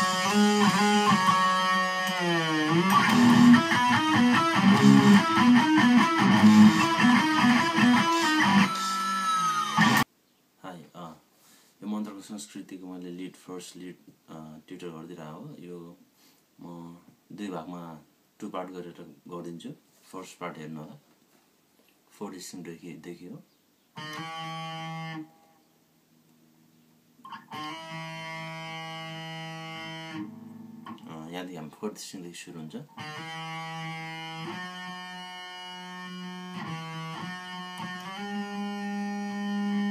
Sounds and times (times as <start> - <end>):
Music: 0.0 - 10.1, 24.0 - 25.3, 27.3 - 31.0, 33.0 - 39.9
Speech: 10.6 - 11.2, 11.8 - 16.0, 16.6 - 21.0, 22.1 - 23.5, 31.0 - 32.9.